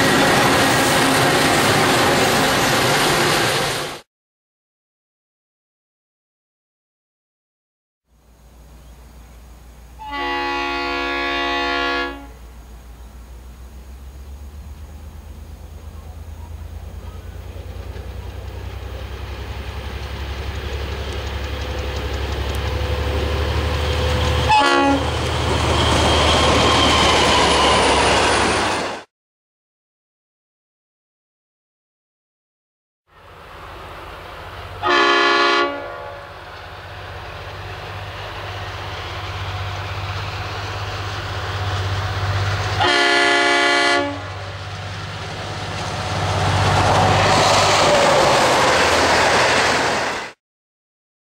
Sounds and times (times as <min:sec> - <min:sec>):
Train horn: 0:10.0 - 0:12.5, 0:24.3 - 0:25.2, 0:34.8 - 0:36.5, 0:42.8 - 0:44.4.